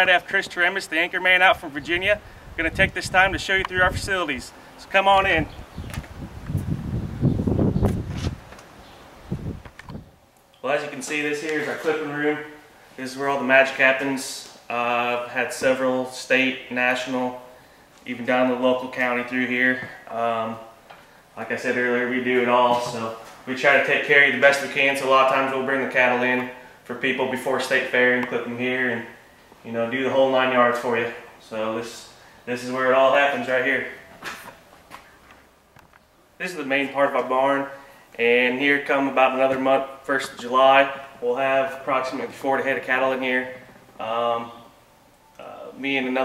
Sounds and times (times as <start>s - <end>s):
Speech: 0.0s - 5.5s, 10.6s - 20.7s, 21.4s - 34.0s, 36.4s - 44.7s, 45.4s - 46.2s.